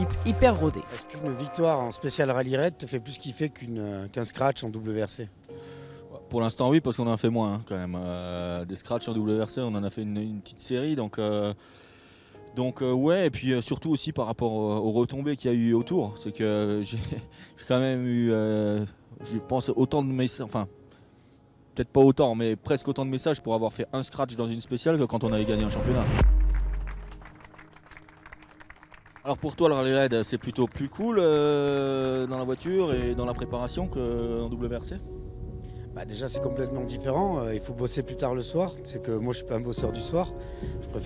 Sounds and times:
Speech: 0.0 - 5.3, 6.2 - 11.6, 12.6 - 20.7, 21.8 - 26.2, 29.3 - 35.0, 36.0 - 40.3
Music: 0.0 - 41.0.

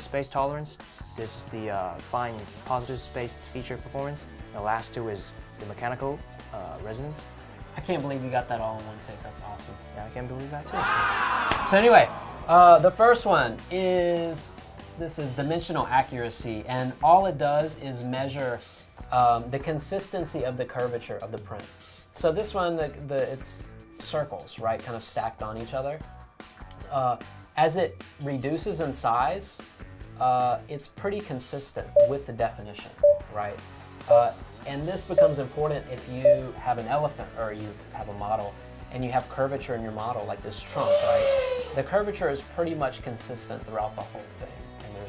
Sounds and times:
Speech: 0.0 - 26.0, 26.8 - 45.0
Music: 0.0 - 45.0.

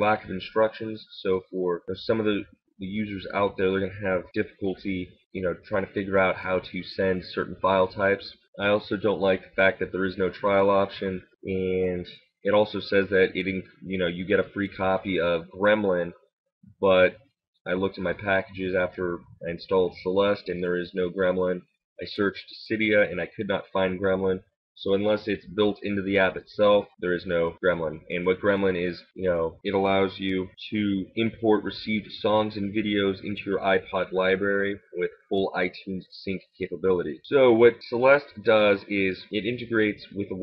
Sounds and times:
Speech: 0.0 - 16.2, 16.8 - 40.4.

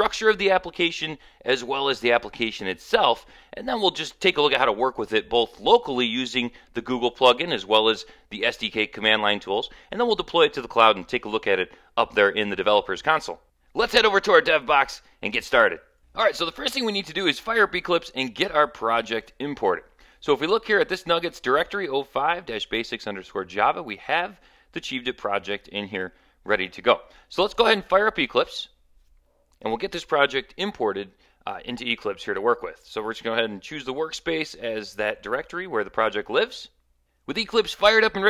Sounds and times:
Speech: 0.0 - 28.8, 29.6 - 38.3.

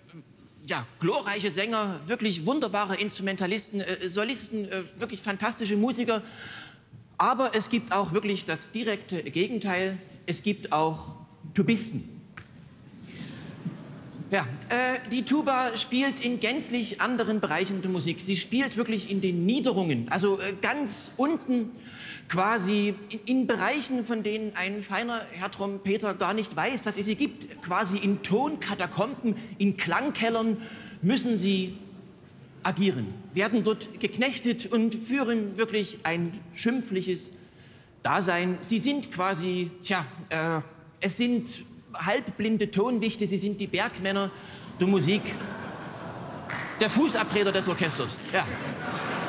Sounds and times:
Speech: 0.6 - 6.2, 7.2 - 12.2, 14.3 - 21.7, 22.3 - 31.8, 32.6 - 37.3, 38.0 - 45.4, 46.8 - 48.7.

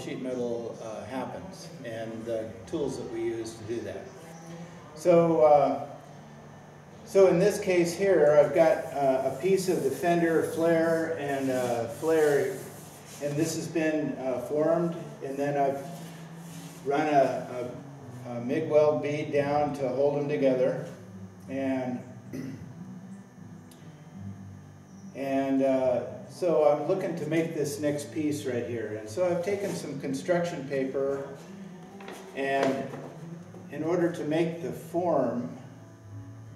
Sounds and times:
Speech: 0.0 - 4.1, 5.0 - 5.9, 7.1 - 12.6, 13.2 - 15.9, 16.9 - 22.0, 25.2 - 31.3, 32.4 - 32.9, 33.7 - 35.6.

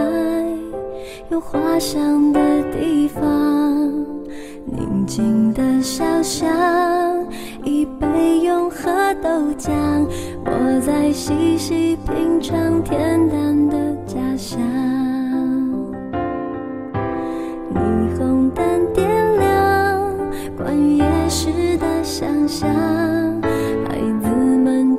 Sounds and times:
Music: 0.0 - 24.9.

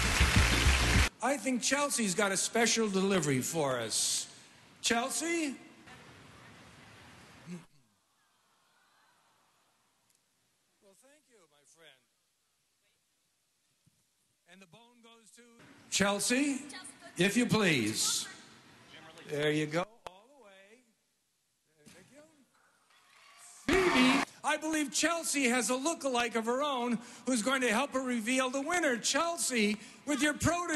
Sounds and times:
Speech: 1.2 - 5.6, 10.8 - 12.1, 19.0 - 20.9, 23.7 - 30.7.

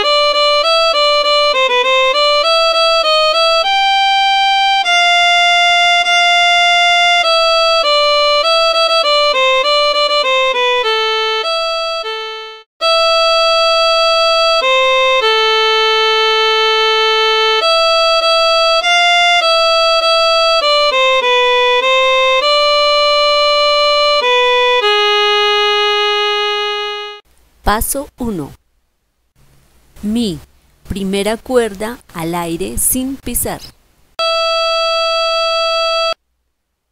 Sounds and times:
Speech: 27.6 - 28.6, 30.0 - 33.8.

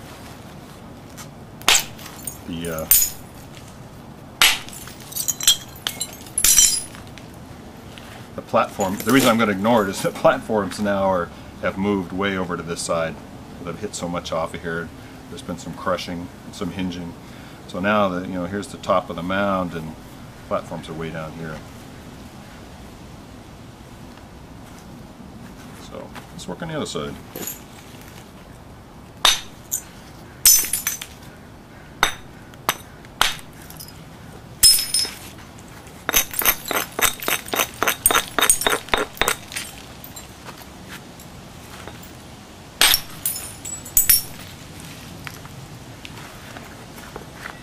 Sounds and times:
Hammer: 32.0 - 33.5.

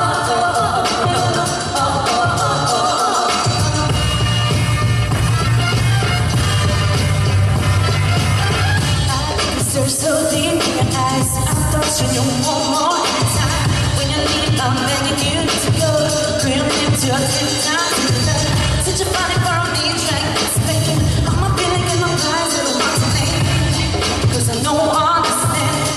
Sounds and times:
Disco: 0.0 - 25.9.

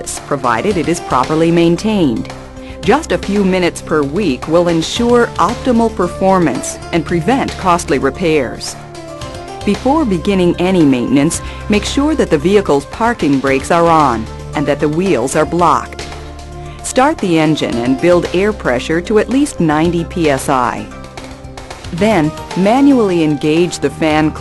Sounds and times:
Speech: 0.0 - 8.8, 9.7 - 16.0, 16.8 - 20.9, 22.0 - 24.4
Music: 0.0 - 24.4.

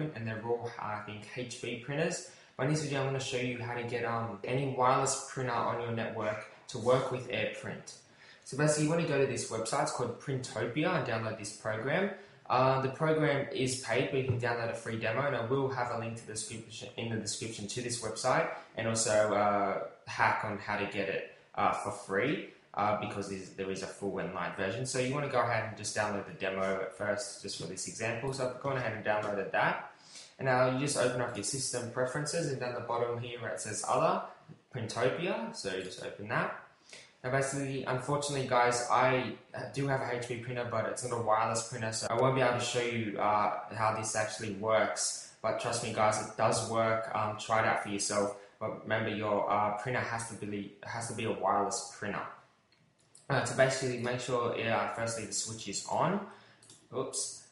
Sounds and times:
Speech: 0.0 - 36.6, 37.2 - 52.3, 53.3 - 57.5.

